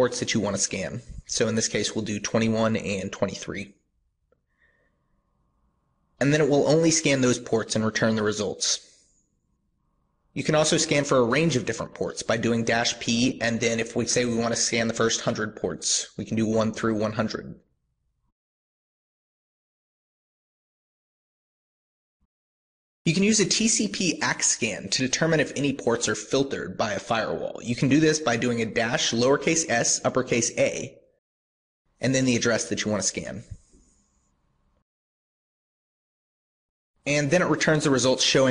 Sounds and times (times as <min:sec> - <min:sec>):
Narration, monologue: 0:00.0 - 0:18.3, 0:23.1 - 0:31.2, 0:31.9 - 0:34.8, 0:37.0 - 0:38.5.